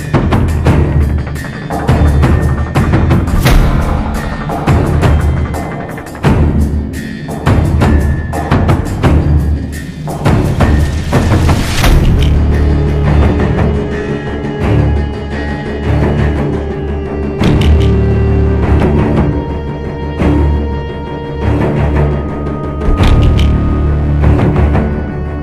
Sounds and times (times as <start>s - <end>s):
Timpani: 1.9s - 25.4s.